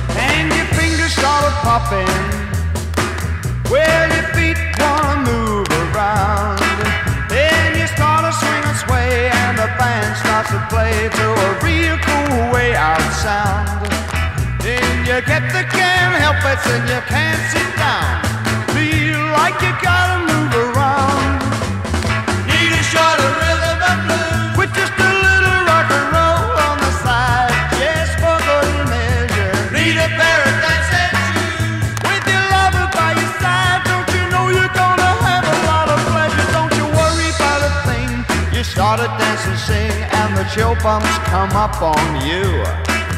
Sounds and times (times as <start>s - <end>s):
Disco: 0.0s - 43.1s
Reggae: 0.0s - 43.1s
Ska: 0.0s - 43.1s.